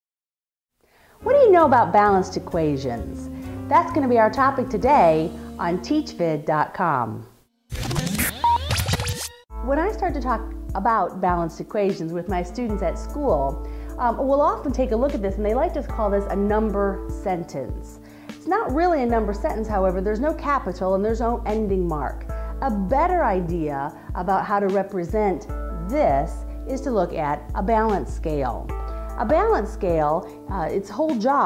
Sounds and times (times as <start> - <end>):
Music: 1.0 - 31.4
Speech: 1.2 - 7.3, 9.6 - 17.8, 18.4 - 28.6, 29.2 - 31.4.